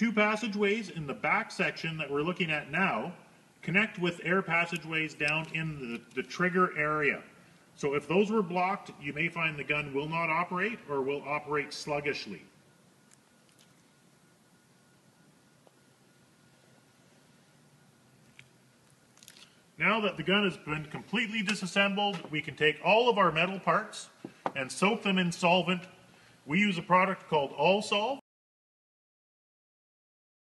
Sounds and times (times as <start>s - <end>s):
Speech: 0.0s - 12.5s, 19.8s - 28.3s.